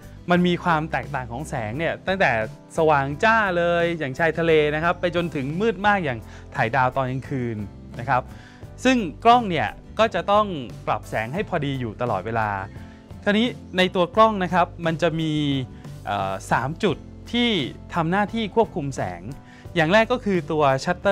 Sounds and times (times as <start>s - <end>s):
Music: 0.0s - 21.1s
Speech: 0.3s - 8.2s, 8.8s - 21.1s.